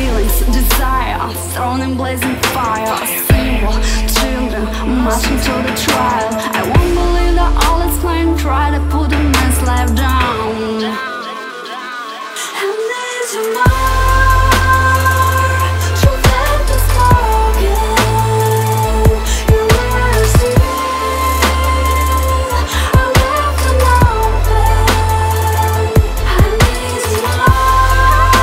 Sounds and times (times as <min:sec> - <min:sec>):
Music: 0:00.0 - 0:28.4.